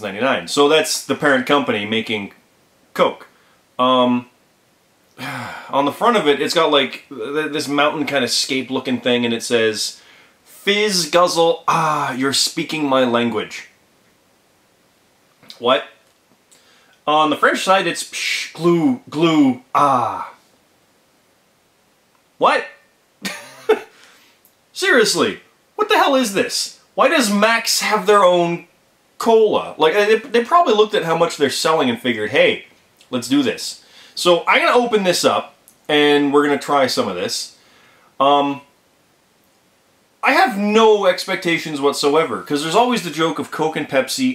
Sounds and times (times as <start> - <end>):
Speech: 0.0 - 2.4, 3.0 - 4.3, 5.2 - 13.7, 15.5 - 16.0, 17.0 - 20.4, 22.4 - 22.8, 24.8 - 37.6, 38.2 - 38.7, 40.2 - 44.3
Inside, small room: 0.0 - 44.3.